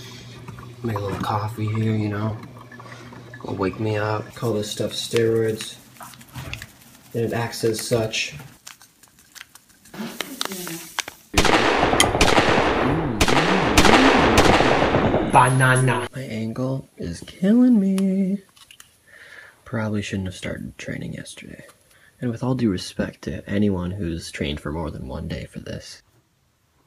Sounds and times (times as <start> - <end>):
Speech: 0.8 - 2.4, 3.4 - 5.8, 7.2 - 8.5, 15.4 - 17.7, 19.7 - 26.0.